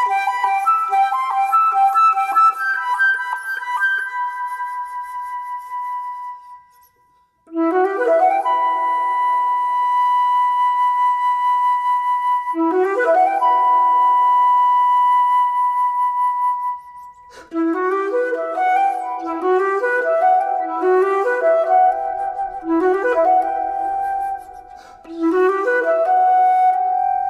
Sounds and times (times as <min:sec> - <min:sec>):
Flute: 0:00.0 - 0:27.2.